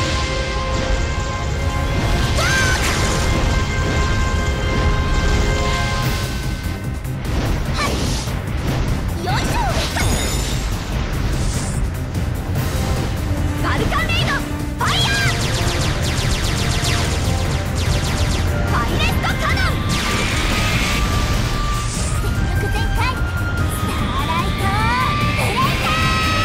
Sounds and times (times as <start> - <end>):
Music: 0.0 - 26.4.